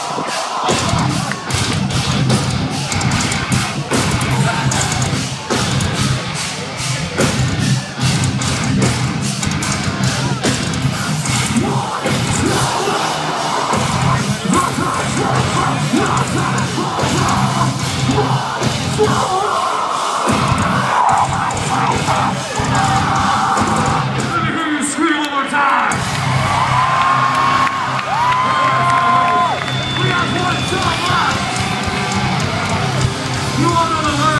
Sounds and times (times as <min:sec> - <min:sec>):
Music: 0:00.0 - 0:25.2, 0:25.9 - 0:34.3
Speech: 0:24.2 - 0:26.0, 0:30.0 - 0:31.5, 0:33.5 - 0:34.3.